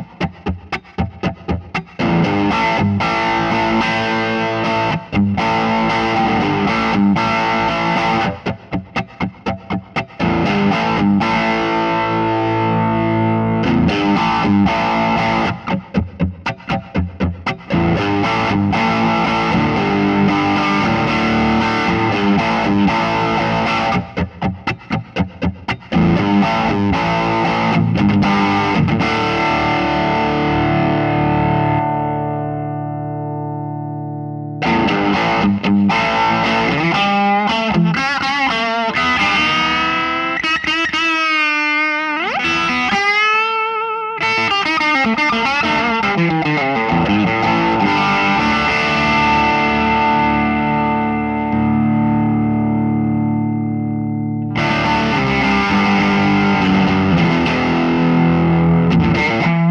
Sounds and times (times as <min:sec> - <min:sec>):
Electric guitar: 0:00.0 - 0:59.7.